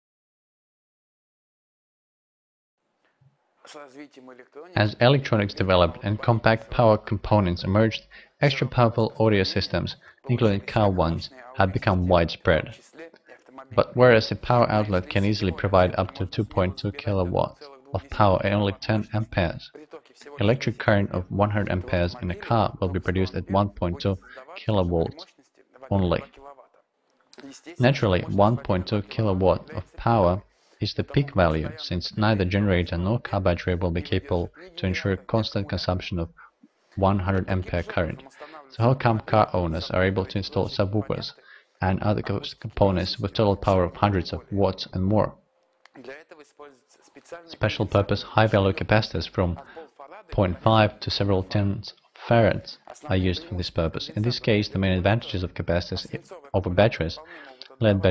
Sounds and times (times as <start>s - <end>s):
Speech: 3.7s - 26.6s, 27.4s - 58.1s.